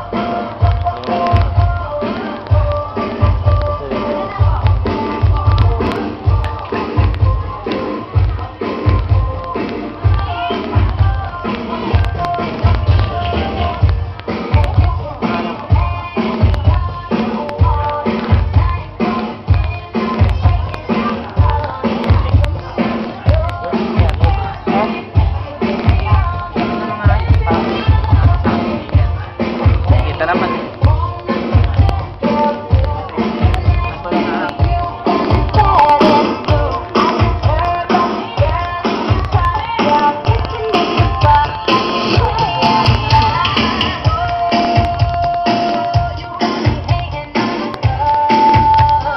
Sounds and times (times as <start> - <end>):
Music: 0.0 - 49.1
Speech: 29.8 - 30.9, 33.2 - 34.8.